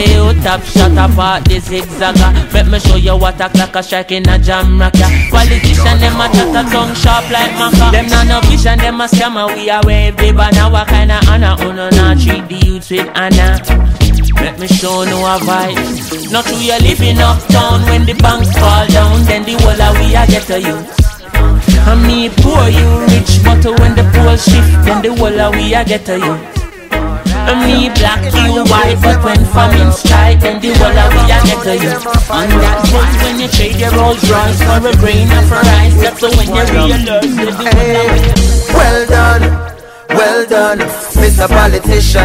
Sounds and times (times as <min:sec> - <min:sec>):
Afrobeat: 0:00.0 - 0:42.2
Reggae: 0:00.0 - 0:42.2.